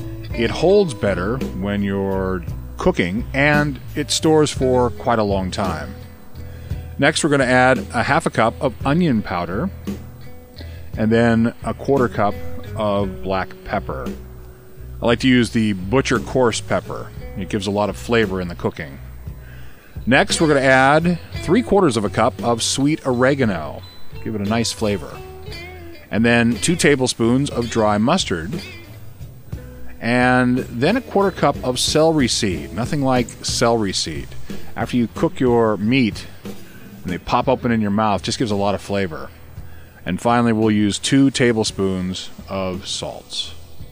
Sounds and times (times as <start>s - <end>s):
Music: 0.0s - 43.9s
Speech: 0.3s - 6.0s, 7.0s - 9.7s, 11.0s - 14.2s, 15.0s - 19.0s, 20.1s - 25.2s, 26.1s - 28.6s, 30.0s - 36.4s, 37.0s - 39.3s, 40.0s - 43.6s.